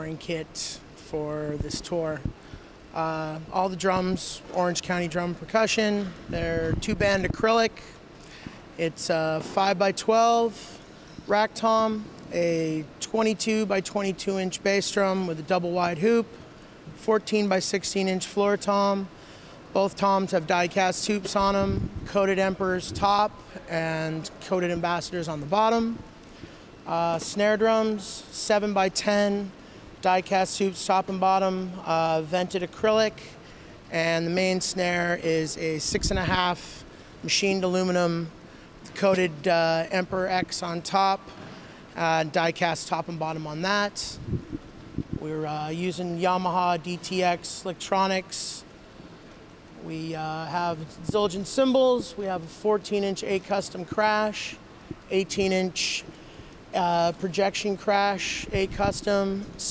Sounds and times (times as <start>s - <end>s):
Speech: 0.0s - 8.0s, 8.8s - 16.4s, 17.0s - 19.1s, 19.7s - 26.0s, 26.9s - 38.3s, 38.9s - 41.3s, 42.0s - 44.2s, 45.2s - 48.7s, 49.8s - 56.1s, 56.7s - 59.7s.